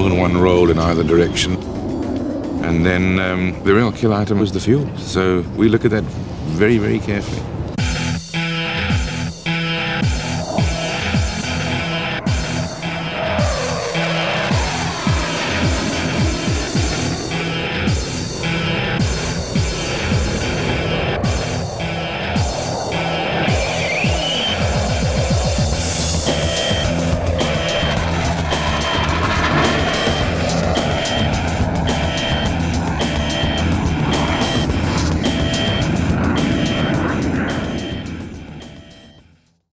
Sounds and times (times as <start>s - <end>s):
Music: 0.0s - 4.2s, 7.6s - 39.7s
Fixed-wing aircraft, airplane: 0.0s - 39.7s.